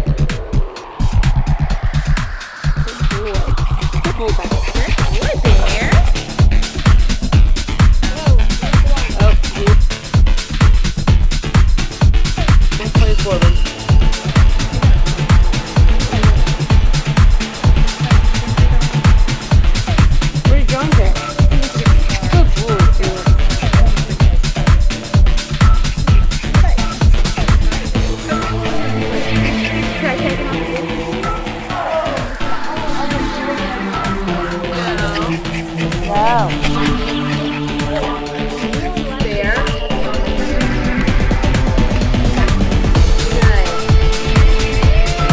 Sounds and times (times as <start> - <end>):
Music: 0.0 - 45.3
Speech: 3.0 - 6.1, 8.0 - 9.8, 12.8 - 13.6, 20.5 - 25.0, 31.7 - 40.8, 42.3 - 43.9.